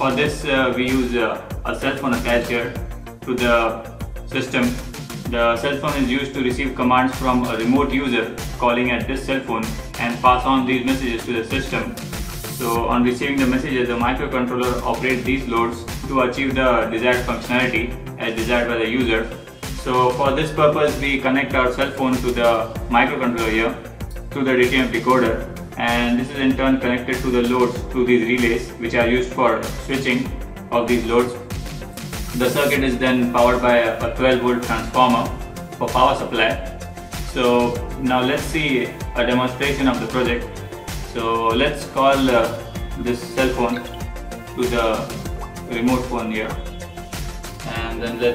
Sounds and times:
Music: 0.0 - 48.3.

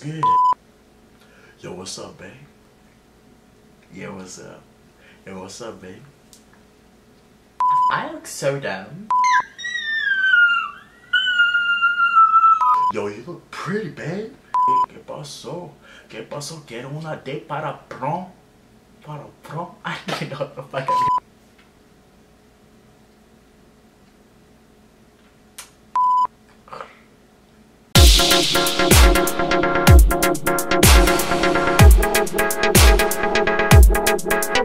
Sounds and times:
Speech: 0.0 - 0.4, 1.6 - 2.5, 3.9 - 6.2, 7.8 - 9.1, 12.9 - 18.4, 19.0 - 21.1
Inside, small room: 0.0 - 34.6.

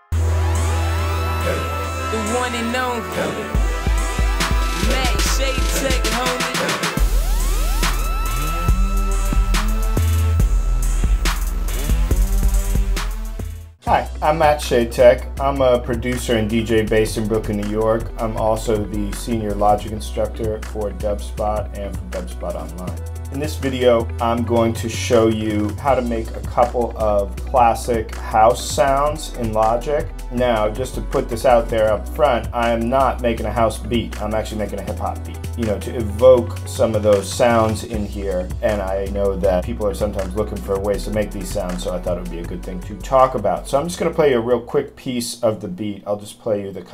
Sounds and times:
Music: 0.0 - 46.9
Speech: 1.5 - 3.5, 4.8 - 6.9, 13.8 - 46.9.

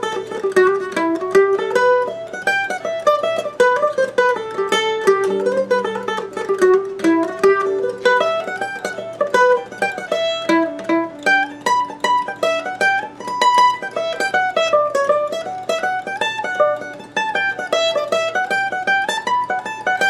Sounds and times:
Mandolin: 0.0 - 20.1.

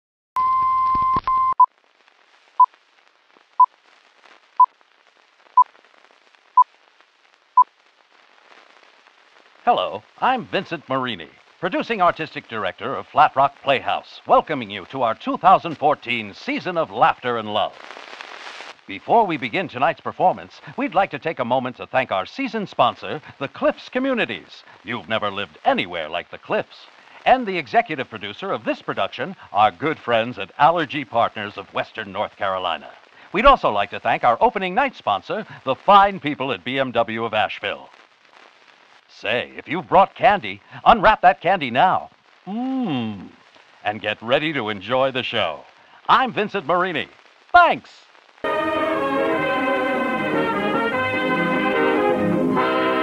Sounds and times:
Sidetone: 0.4 - 1.7, 48.4 - 53.0
Speech: 9.7 - 17.8, 18.9 - 37.9, 39.1 - 48.1.

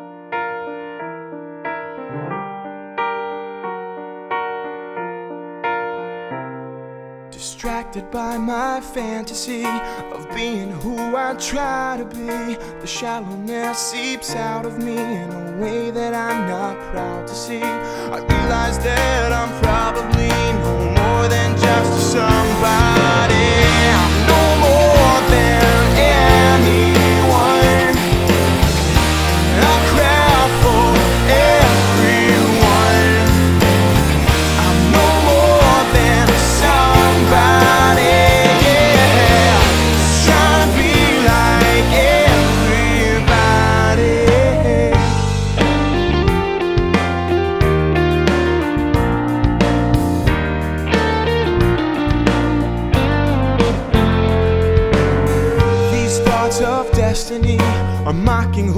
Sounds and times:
Funk: 18.3 - 58.6.

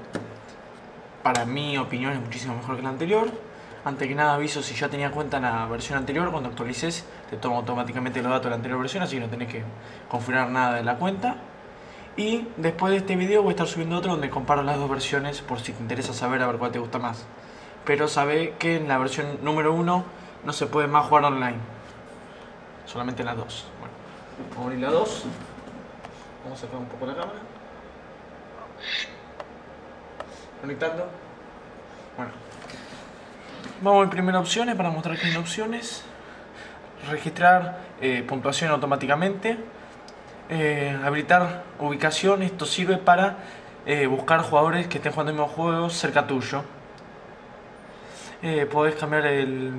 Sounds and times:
Speech: 1.2 - 11.5, 12.2 - 21.8, 22.9 - 25.4, 26.4 - 27.6, 30.6 - 31.3, 32.2 - 32.4, 33.8 - 36.1, 37.0 - 39.7, 40.5 - 46.8, 48.4 - 49.7.

